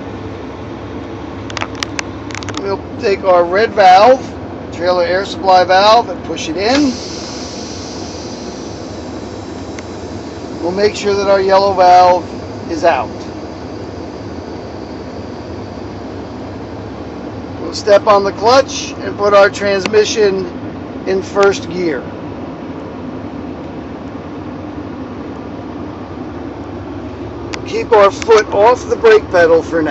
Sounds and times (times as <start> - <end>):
Car: 0.0 - 29.9
Speech: 2.6 - 7.0, 10.6 - 13.3, 17.6 - 22.1, 27.6 - 29.9.